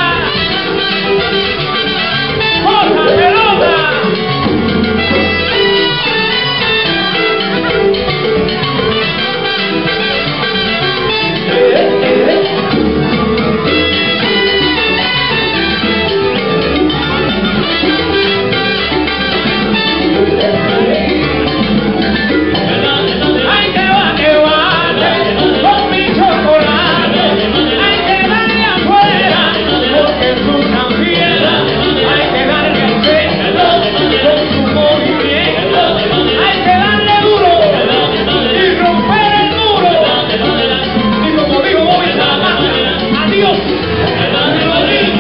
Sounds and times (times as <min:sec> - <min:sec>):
Music: 0:00.0 - 0:45.2.